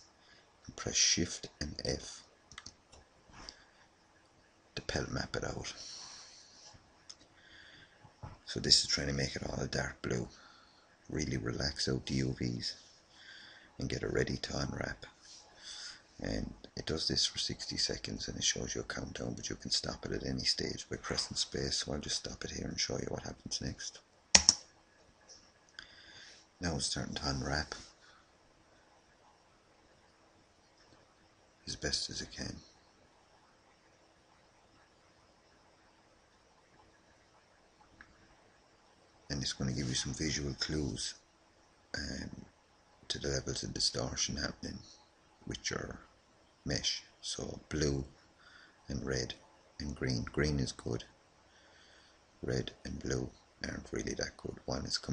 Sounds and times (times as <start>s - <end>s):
Inside, small room: 0.0s - 55.1s
Speech: 0.7s - 2.3s, 4.8s - 5.9s, 8.4s - 10.4s, 11.1s - 12.8s, 13.8s - 15.2s, 16.2s - 24.0s, 26.6s - 27.9s, 31.7s - 32.7s, 39.3s - 41.2s, 42.0s - 42.5s, 43.1s - 46.1s, 46.7s - 48.2s, 48.9s - 51.1s, 52.4s - 55.1s.